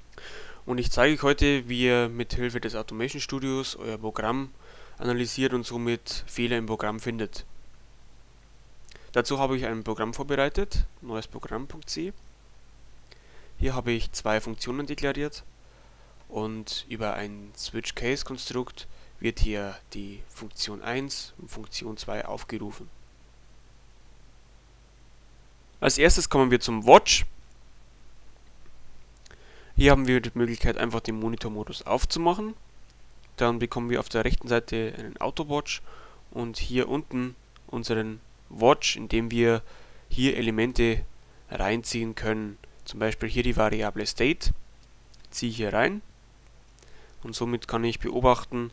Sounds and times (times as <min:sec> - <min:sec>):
Speech: 0:00.7 - 0:07.5, 0:09.2 - 0:12.2, 0:13.6 - 0:15.5, 0:16.3 - 0:22.9, 0:25.8 - 0:27.3, 0:29.8 - 0:32.6, 0:33.4 - 0:44.6, 0:45.3 - 0:46.1, 0:47.2 - 0:48.7.